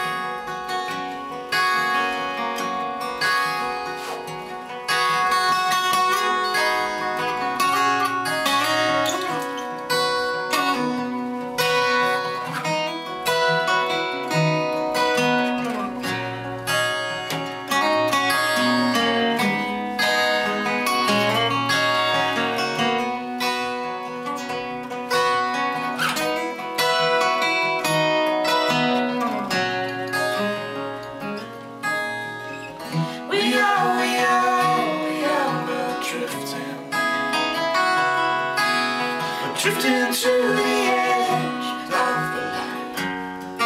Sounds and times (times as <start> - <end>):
Strum: 0.0 - 43.6
Singing: 33.1 - 37.1, 39.4 - 43.0.